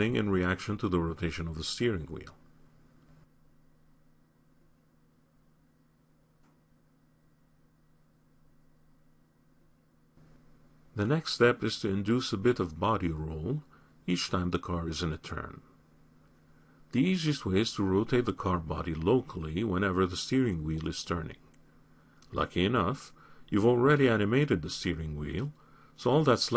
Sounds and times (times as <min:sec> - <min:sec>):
Speech: 0:00.0 - 0:02.4, 0:11.0 - 0:15.7, 0:16.9 - 0:21.5, 0:22.3 - 0:26.5.